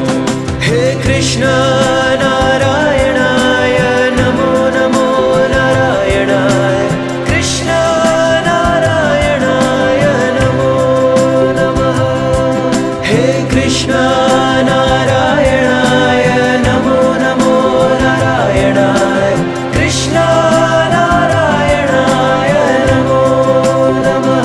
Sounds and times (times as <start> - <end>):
Music: 0.0 - 24.4
Singing: 0.0 - 24.4.